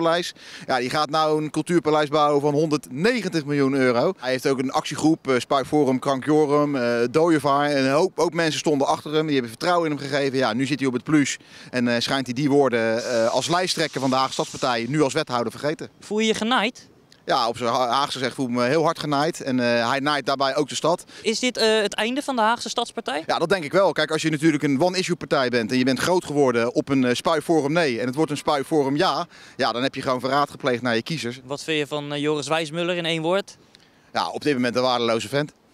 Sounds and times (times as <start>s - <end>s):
Speech: 0.0s - 33.6s, 34.2s - 35.6s.